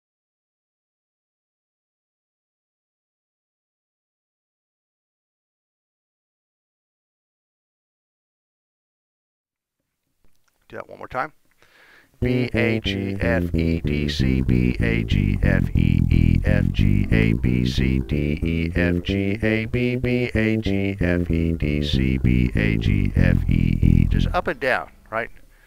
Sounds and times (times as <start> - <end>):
Speech: 10.7 - 11.4, 24.0 - 25.4
Strum: 12.2 - 24.6.